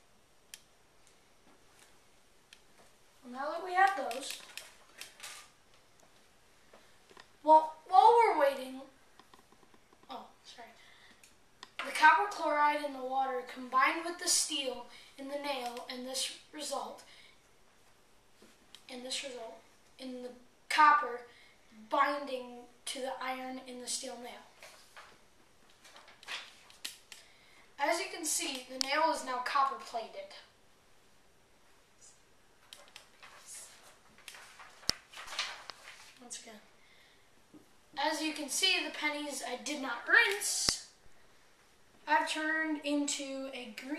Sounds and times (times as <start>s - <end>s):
Inside, small room: 0.0s - 43.9s
Speech: 3.2s - 4.4s, 7.4s - 9.0s, 10.1s - 10.8s, 11.8s - 17.1s, 18.9s - 24.6s, 27.8s - 30.6s, 36.2s - 36.7s, 38.0s - 41.0s, 42.0s - 43.9s.